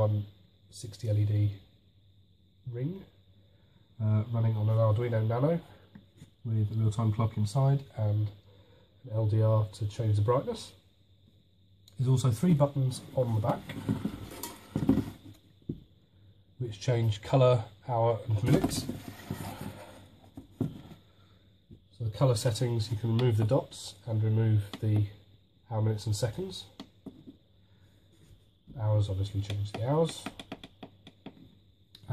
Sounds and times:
Speech: 0.0 - 1.7, 2.6 - 3.2, 4.0 - 5.8, 6.4 - 8.4, 9.0 - 10.8, 11.9 - 13.8, 16.6 - 19.0, 21.9 - 26.8, 28.7 - 30.4.

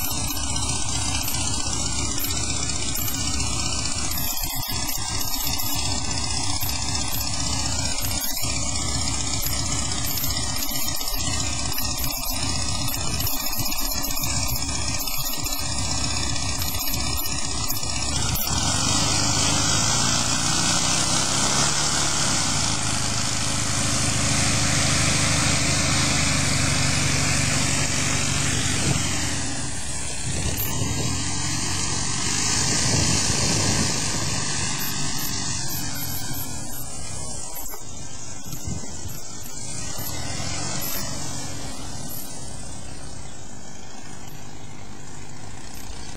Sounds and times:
Fixed-wing aircraft, airplane: 0.0 - 46.1
Outside, rural or natural: 0.0 - 46.1.

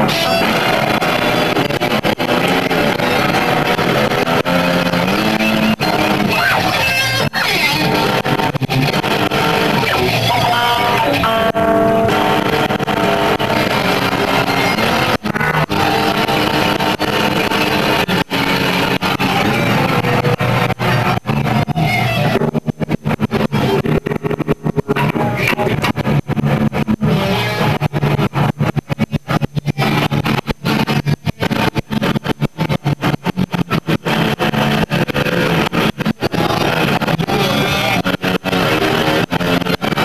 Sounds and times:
Electric guitar: 0.0 - 40.0
Strum: 0.0 - 40.0.

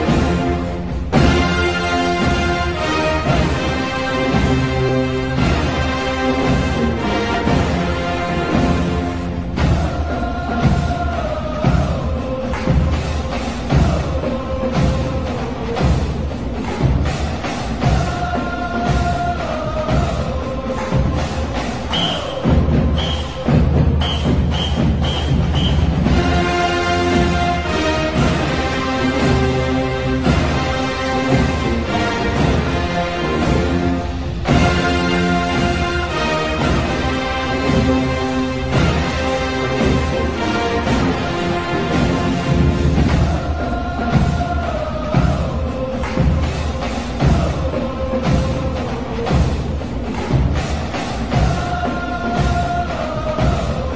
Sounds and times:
Music: 0.0 - 53.9.

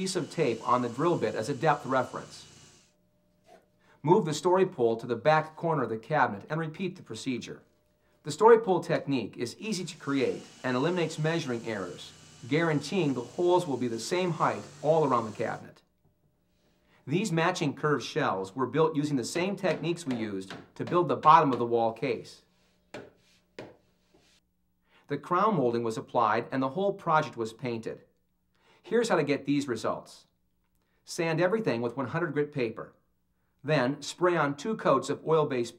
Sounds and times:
Speech: 0.0 - 2.4, 4.0 - 7.6, 8.3 - 15.8, 17.1 - 22.5, 25.1 - 28.1, 28.9 - 30.3, 31.1 - 33.0, 33.6 - 35.7.

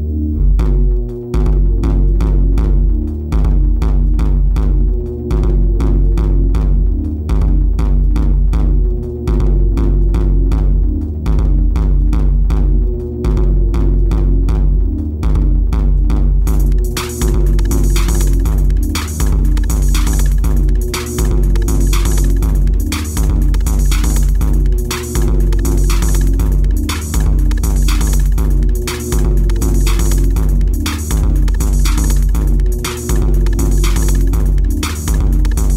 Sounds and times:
Music: 0.0 - 35.7.

